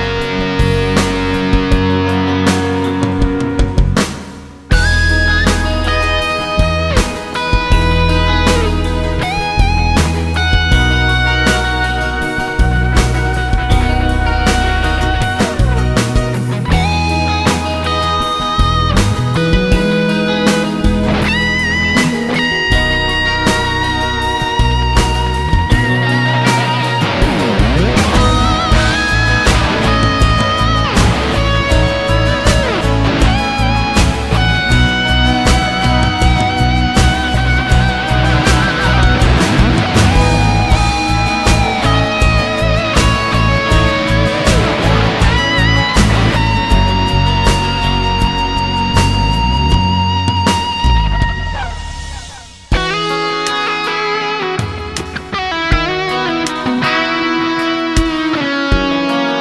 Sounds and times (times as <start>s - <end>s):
Guitar: 0.0s - 59.4s.